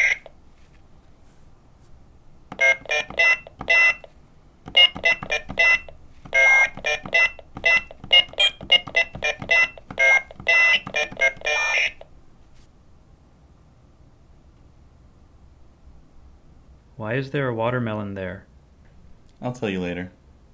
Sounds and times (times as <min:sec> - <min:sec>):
Speech: 0:17.0 - 0:18.5, 0:19.4 - 0:20.2.